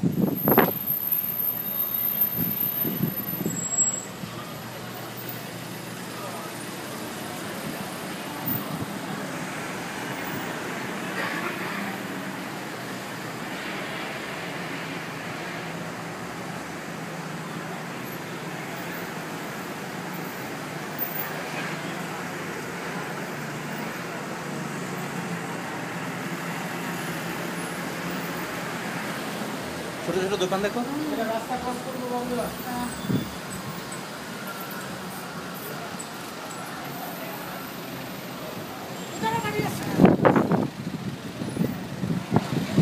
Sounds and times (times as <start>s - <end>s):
Outside, urban or manmade: 0.0s - 42.8s.